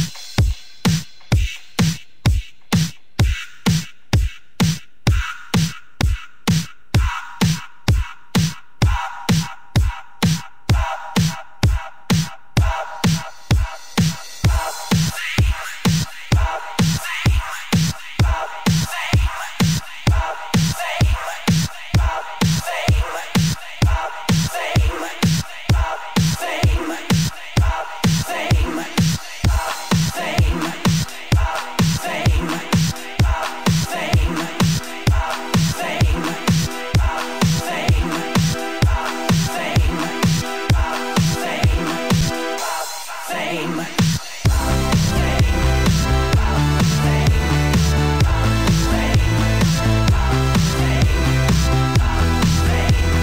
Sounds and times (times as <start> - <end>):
Music: 0.0 - 53.2.